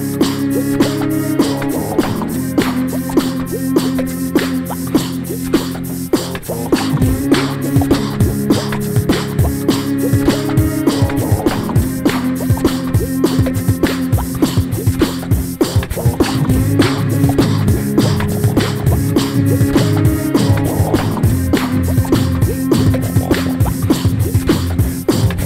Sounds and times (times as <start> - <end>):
Beatboxing: 0.0 - 25.4.